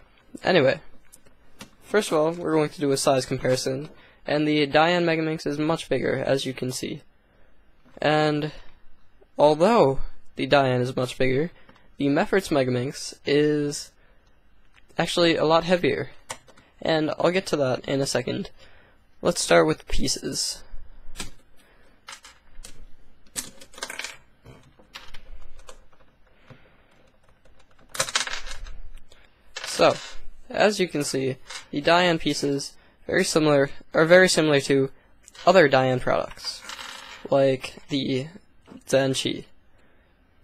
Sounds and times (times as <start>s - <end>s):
Speech: 0.4s - 0.9s, 1.9s - 7.0s, 8.0s - 8.7s, 9.4s - 14.0s, 14.9s - 16.2s, 16.8s - 18.5s, 19.2s - 20.7s, 29.7s - 36.6s, 37.3s - 39.5s.